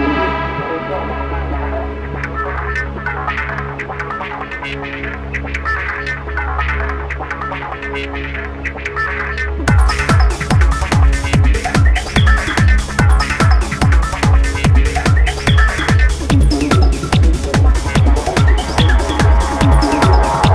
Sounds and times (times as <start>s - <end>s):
Music: 0.0s - 20.5s.